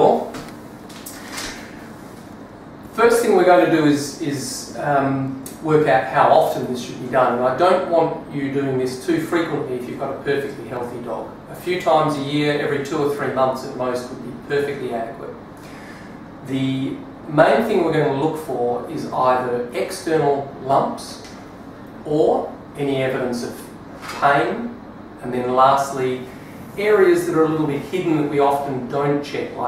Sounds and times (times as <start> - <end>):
Speech: 0.0 - 0.4, 2.9 - 15.4, 16.4 - 21.4, 22.0 - 29.6.